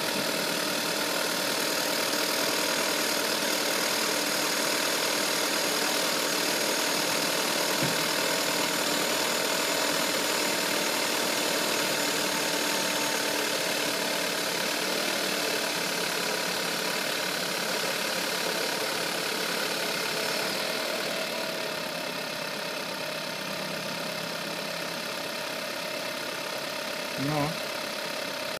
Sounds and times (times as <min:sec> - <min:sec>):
Idling: 0:00.0 - 0:28.6
Medium engine (mid frequency): 0:00.0 - 0:28.6
Vehicle: 0:00.0 - 0:28.6
Speech: 0:27.2 - 0:27.6.